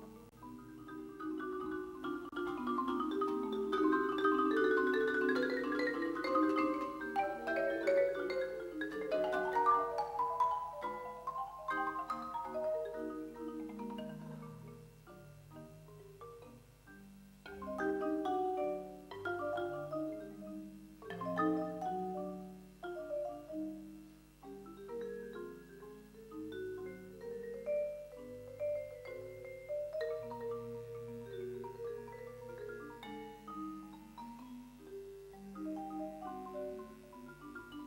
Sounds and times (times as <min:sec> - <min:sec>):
Marimba, xylophone: 0:00.0 - 0:37.8
Vibraphone: 0:00.0 - 0:37.8.